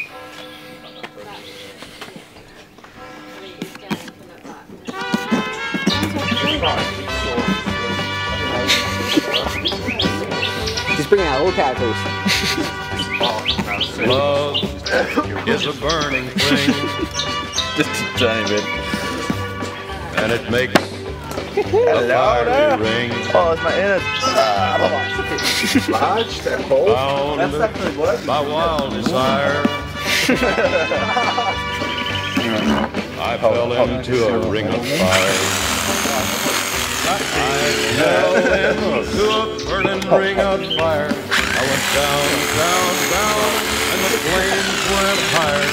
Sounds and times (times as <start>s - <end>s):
Music: 0.0s - 45.7s
Speech: 13.3s - 16.8s, 32.4s - 35.4s.